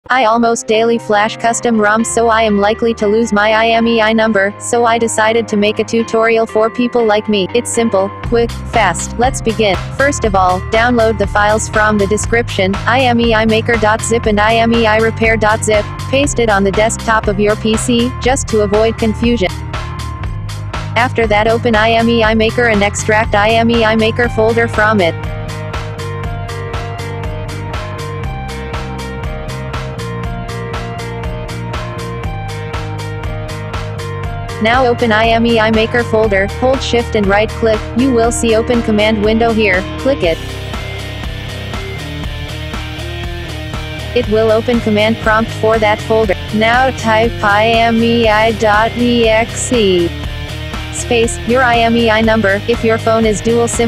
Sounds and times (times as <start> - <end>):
Speech synthesizer: 0.1 - 19.5, 21.0 - 25.2, 34.6 - 40.4, 44.2 - 50.1, 51.0 - 53.8.